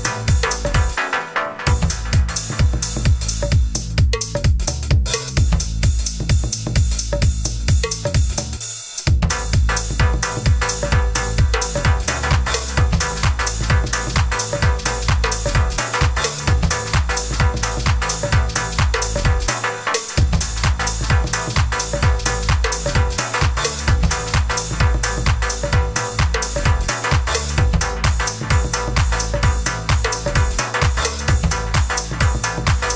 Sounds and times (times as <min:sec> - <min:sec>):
Music: 0:00.0 - 0:32.9.